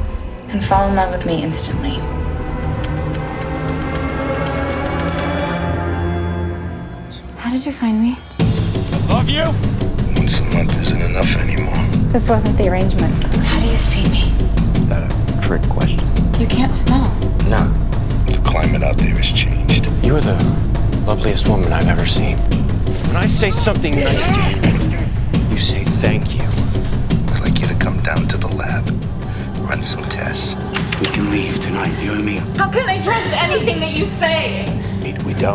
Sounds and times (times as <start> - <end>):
Music: 0.0 - 35.5
Speech: 9.1 - 12.8, 14.9 - 16.0, 17.4 - 22.4, 23.1 - 24.7, 25.5 - 26.5, 27.3 - 28.8, 29.6 - 35.5.